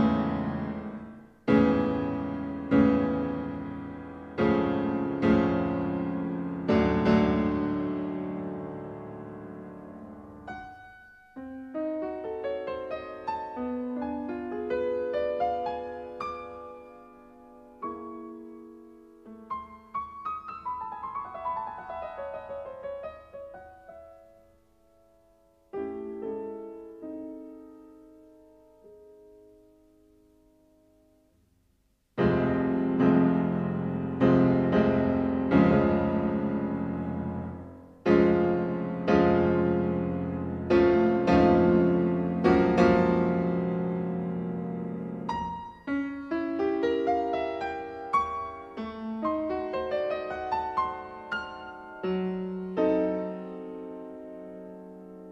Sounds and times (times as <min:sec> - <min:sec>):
Classical music: 0:00.0 - 0:31.3, 0:32.1 - 0:55.3
Piano: 0:00.0 - 0:55.3.